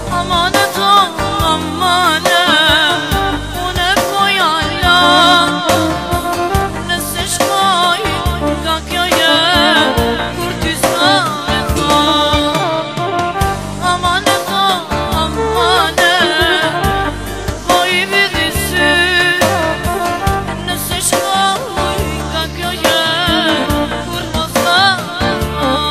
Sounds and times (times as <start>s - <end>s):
Music: 0.0s - 25.9s.